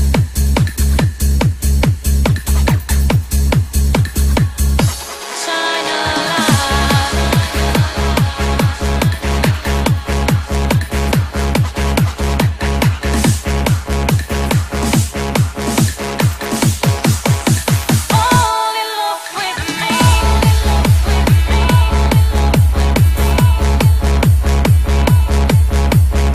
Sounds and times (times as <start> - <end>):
Trance music: 0.0 - 26.3.